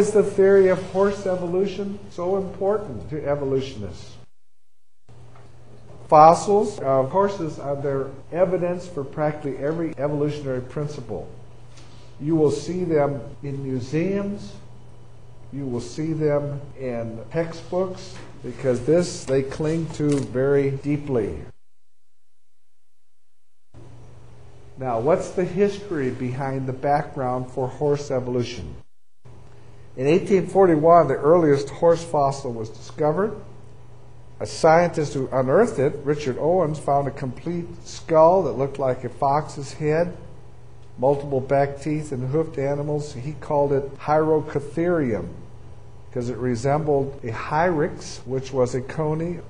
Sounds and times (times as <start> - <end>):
Speech: 0.0 - 4.3, 6.1 - 11.4, 12.2 - 14.7, 15.5 - 21.6, 24.8 - 28.8, 30.0 - 33.5, 34.4 - 40.3, 41.0 - 45.5, 46.1 - 49.4.